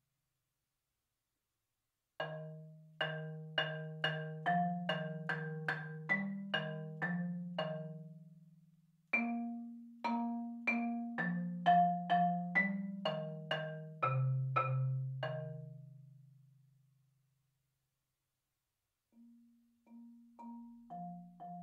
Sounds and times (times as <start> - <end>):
Marimba, xylophone: 2.2 - 8.4, 9.1 - 16.0, 19.2 - 21.6
Glockenspiel: 2.2 - 16.5, 19.2 - 21.6.